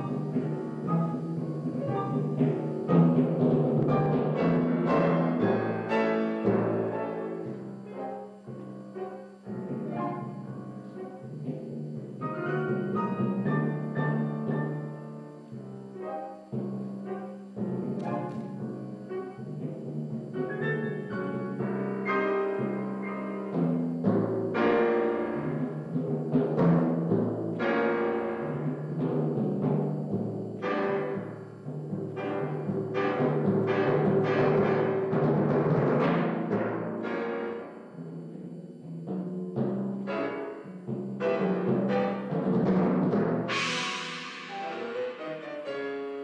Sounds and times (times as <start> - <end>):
Timpani: 0.0 - 46.2.